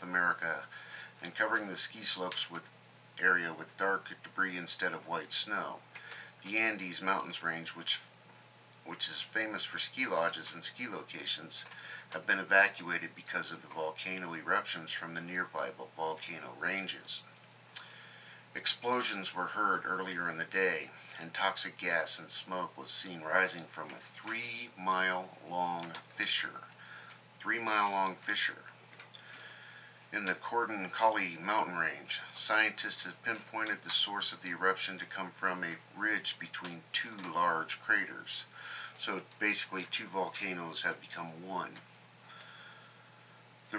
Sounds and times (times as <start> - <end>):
Speech: 0.0 - 5.8, 6.4 - 17.3, 18.6 - 26.7, 27.4 - 28.8, 30.1 - 41.8.